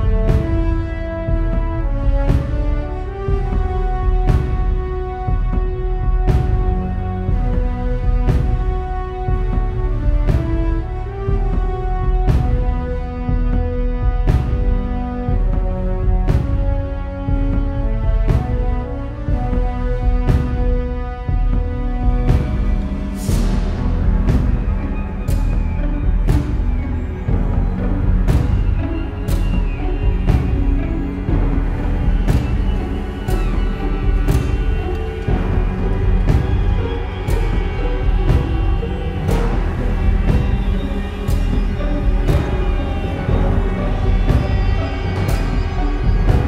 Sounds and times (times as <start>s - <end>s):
Video game music: 0.0s - 46.4s.